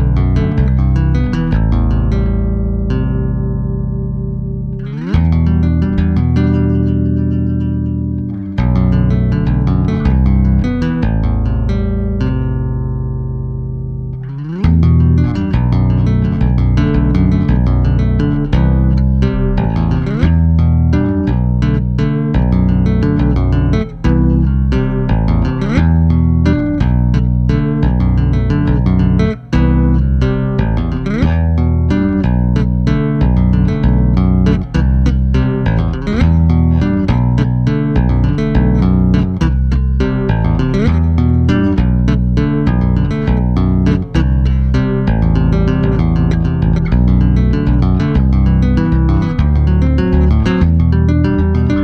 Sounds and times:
Bass guitar: 0:00.0 - 0:51.8
Tapping (guitar technique): 0:00.0 - 0:51.8.

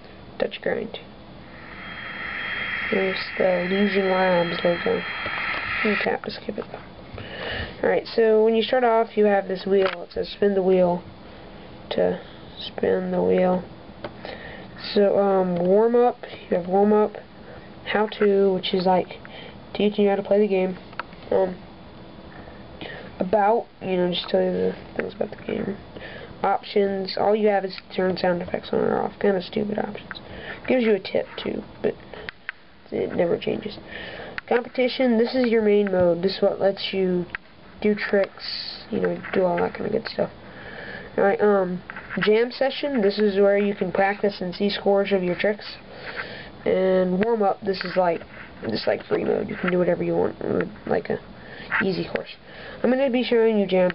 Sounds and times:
Speech: 0:00.4 - 0:01.1, 0:02.9 - 0:05.1, 0:05.8 - 0:06.9, 0:07.8 - 0:11.1, 0:11.9 - 0:13.7, 0:14.8 - 0:17.3, 0:17.9 - 0:21.6, 0:23.2 - 0:25.8, 0:26.4 - 0:32.0, 0:32.9 - 0:33.8, 0:34.5 - 0:40.4, 0:41.2 - 0:45.8, 0:46.6 - 0:53.9.

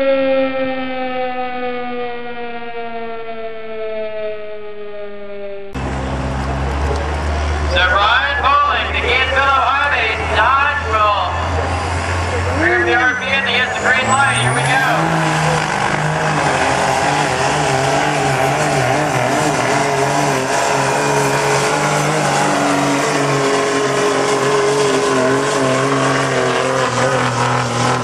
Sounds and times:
Truck: 0:00.0 - 0:03.8, 0:04.7 - 0:28.0.

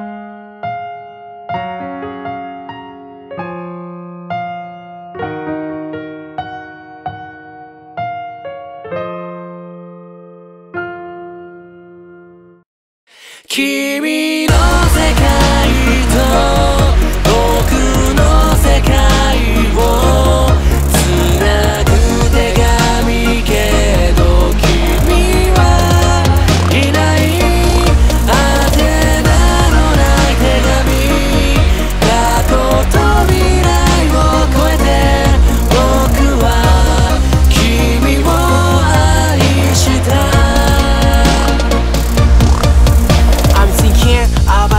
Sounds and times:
Music: 0:00.0 - 0:44.7.

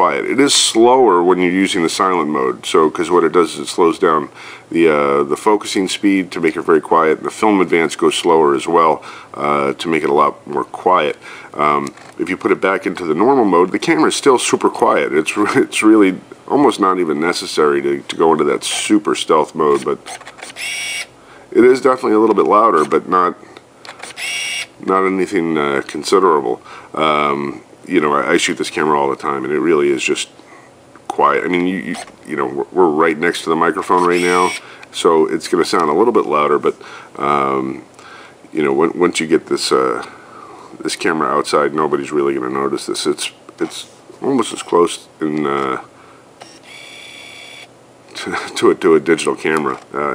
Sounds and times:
Speech: 0:00.0 - 0:20.1, 0:21.5 - 0:23.4, 0:24.8 - 0:30.3, 0:31.1 - 0:37.9, 0:38.5 - 0:40.1, 0:40.8 - 0:45.9, 0:48.1 - 0:50.1
Camera: 0:20.0 - 0:21.1, 0:23.9 - 0:24.7, 0:31.9 - 0:32.2, 0:34.0 - 0:34.6, 0:46.4 - 0:47.7.

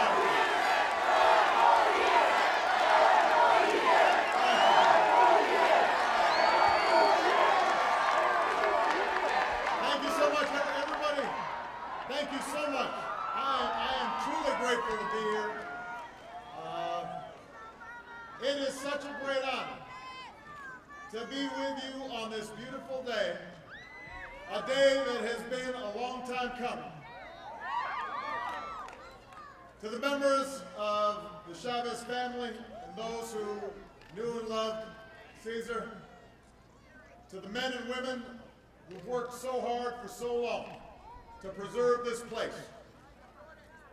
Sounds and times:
Male speech, man speaking: 0:09.8 - 0:11.4, 0:12.1 - 0:15.6, 0:16.6 - 0:17.2, 0:18.4 - 0:19.8, 0:21.1 - 0:23.6, 0:24.5 - 0:27.0, 0:29.8 - 0:36.0, 0:37.3 - 0:40.8, 0:41.4 - 0:43.9.

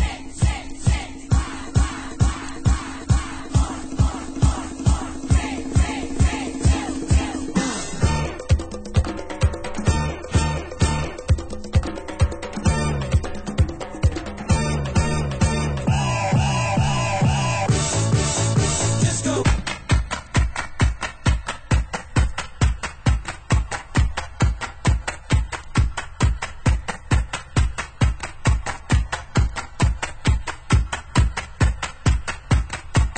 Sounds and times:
Music: 0:00.0 - 0:33.1.

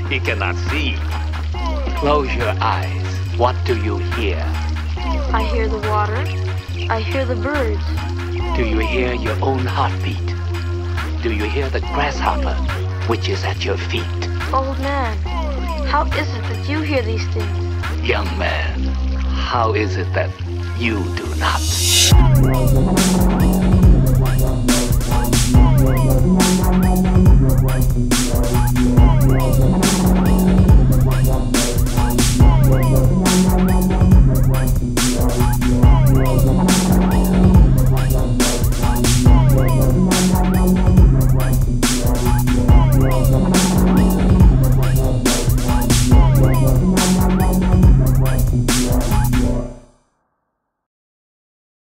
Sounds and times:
Dubstep: 0:21.2 - 0:49.6.

